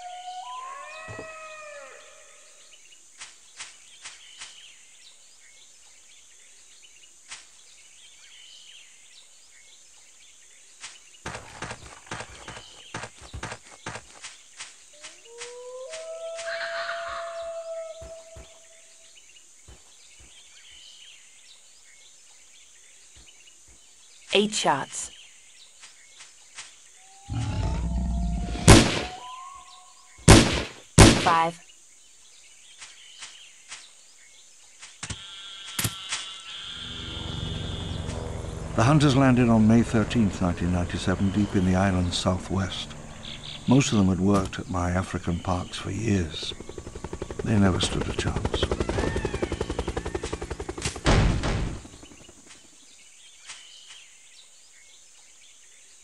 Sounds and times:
Environmental noise: 0.0 - 56.0.

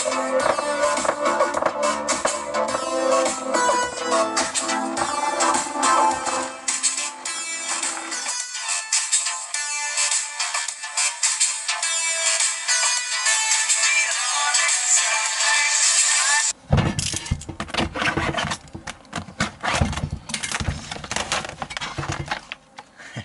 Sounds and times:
Music: 0.0 - 16.6.

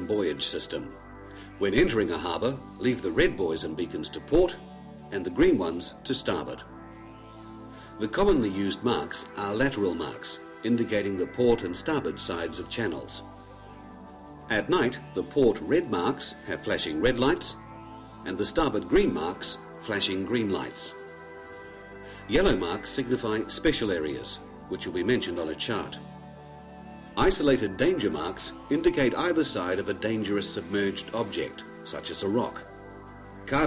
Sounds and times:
Speech: 0.0 - 0.9, 1.6 - 6.6, 8.0 - 13.2, 14.5 - 17.6, 18.2 - 21.0, 22.3 - 26.0, 27.2 - 32.6
Music: 0.0 - 33.6.

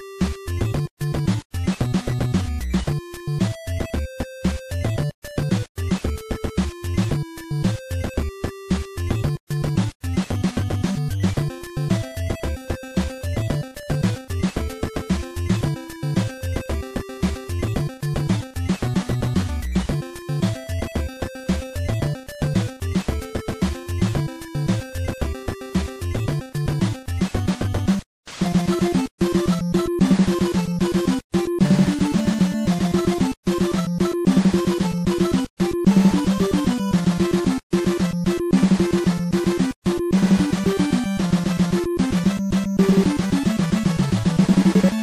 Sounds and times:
Background music: 0.0 - 45.0
Soundtrack music: 28.4 - 45.0
Theme music: 28.4 - 45.0.

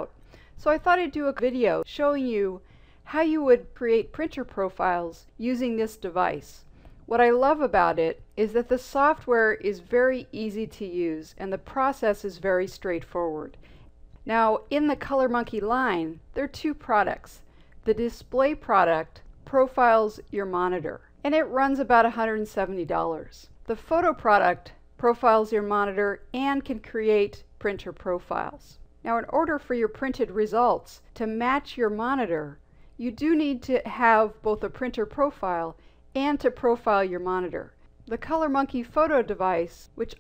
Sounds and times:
Speech: 0.0 - 13.6, 14.2 - 40.2.

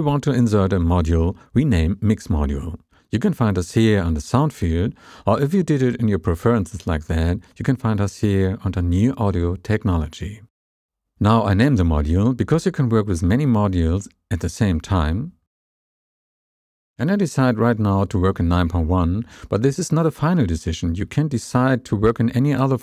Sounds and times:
Speech: 0.0 - 10.5, 11.2 - 15.4, 17.0 - 22.8.

